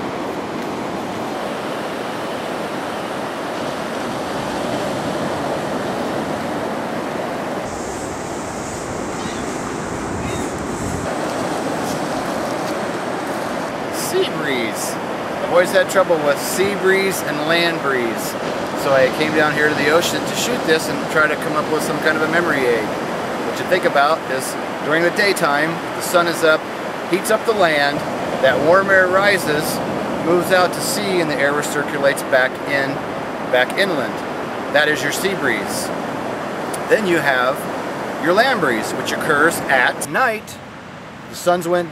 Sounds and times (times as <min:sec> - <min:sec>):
Ocean: 0:00.0 - 0:41.9.